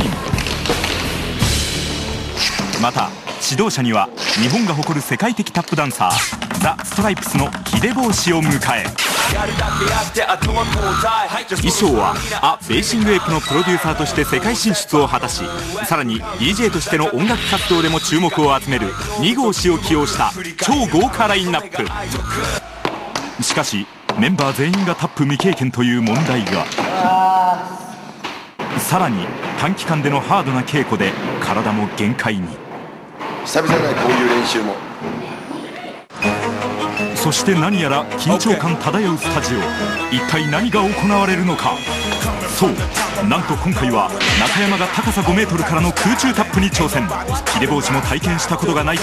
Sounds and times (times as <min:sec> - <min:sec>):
Music: 0:00.0 - 0:03.6, 0:06.0 - 0:22.9, 0:36.1 - 0:49.0
Speech: 0:02.7 - 0:09.0, 0:11.6 - 0:22.6, 0:23.4 - 0:27.9, 0:28.7 - 0:32.6, 0:33.5 - 0:34.8, 0:37.2 - 0:41.8, 0:42.4 - 0:49.0.